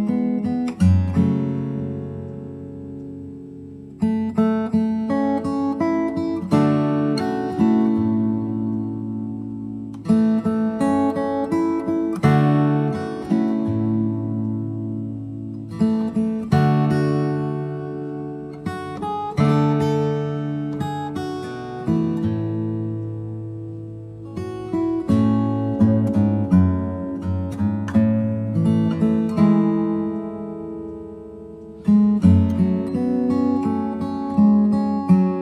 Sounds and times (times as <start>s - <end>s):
Acoustic guitar: 0.0s - 35.4s.